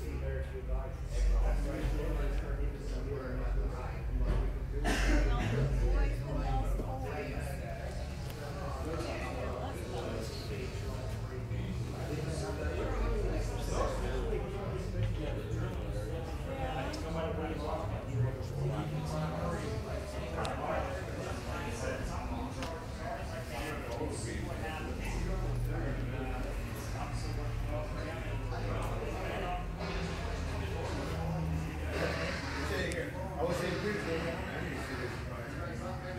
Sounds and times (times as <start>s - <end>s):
Speech: 0.0s - 36.1s.